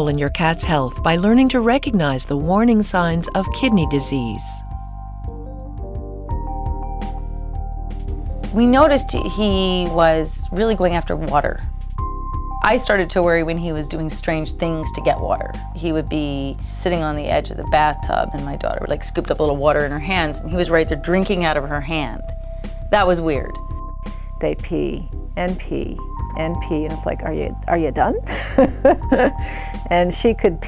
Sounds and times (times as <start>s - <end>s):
Speech: 0.0s - 4.6s, 8.6s - 11.6s, 12.6s - 22.2s, 22.9s - 23.6s, 24.4s - 28.3s, 29.9s - 30.6s
Music: 0.0s - 30.6s.